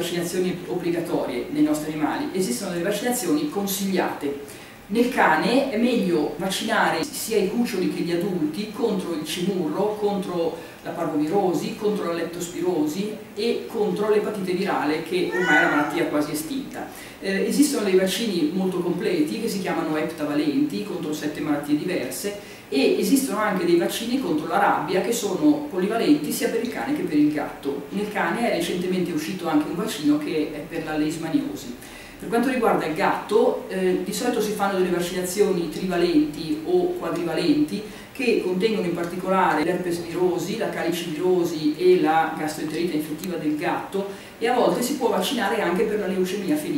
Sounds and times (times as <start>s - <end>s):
Speech: 0.0s - 46.7s.